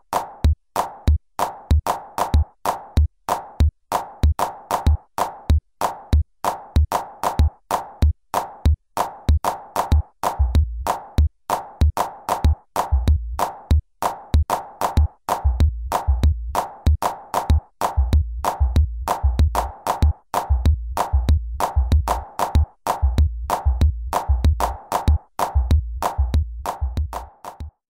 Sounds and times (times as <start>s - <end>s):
Music: 0.0s - 27.9s.